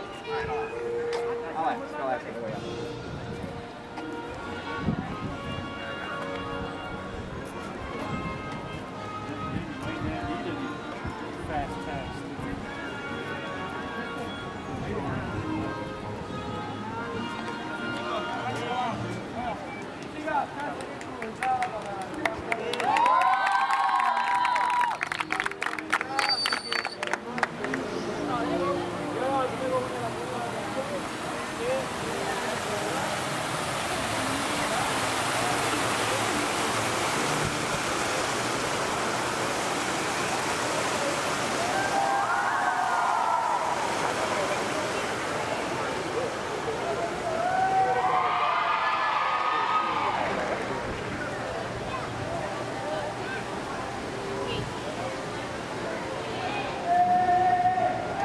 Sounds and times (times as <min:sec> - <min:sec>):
Music: 0:00.0 - 0:43.8, 0:44.4 - 0:58.2.